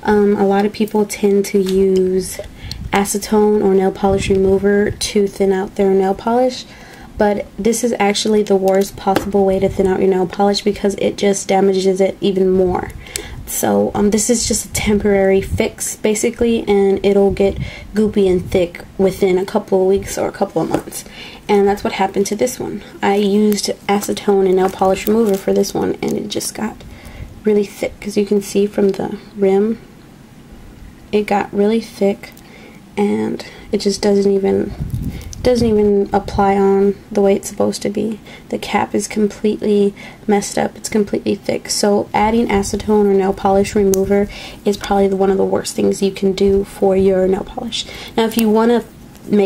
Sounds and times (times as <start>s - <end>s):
Speech: 0.0s - 26.8s, 27.4s - 29.8s, 31.1s - 32.4s, 33.0s - 34.8s, 35.4s - 49.4s.